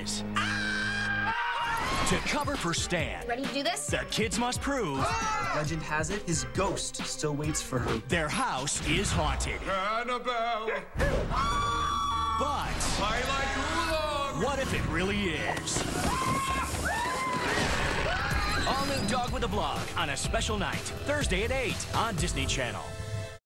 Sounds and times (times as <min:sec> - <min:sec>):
Music: 0:00.0 - 0:23.4
Speech: 0:18.7 - 0:22.9.